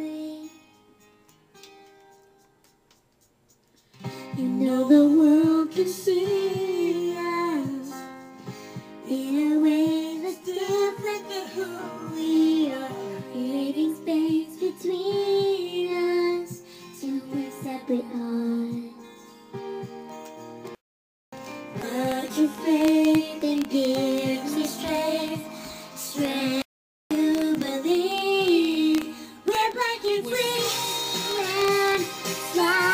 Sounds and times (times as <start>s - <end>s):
Music: 0.0s - 20.8s, 21.4s - 32.9s.